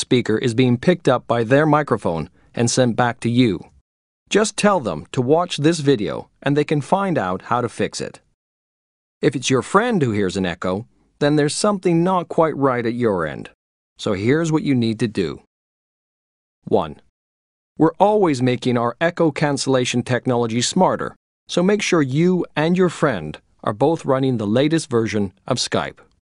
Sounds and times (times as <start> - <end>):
Speech: 0.0 - 3.7, 4.3 - 8.3, 9.2 - 15.5, 16.6 - 17.1, 17.8 - 26.1.